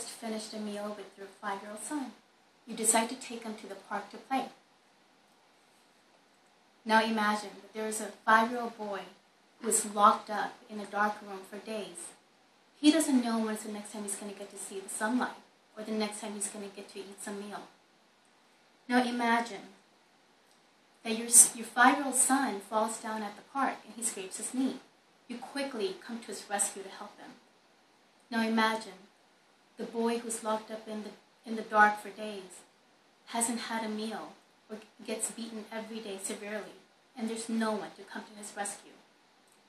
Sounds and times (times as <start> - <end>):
Female speech, woman speaking: 0.0 - 4.6, 6.9 - 12.2, 12.8 - 17.7, 18.9 - 19.8, 21.0 - 27.4, 28.3 - 29.1, 29.8 - 32.7, 33.3 - 39.0.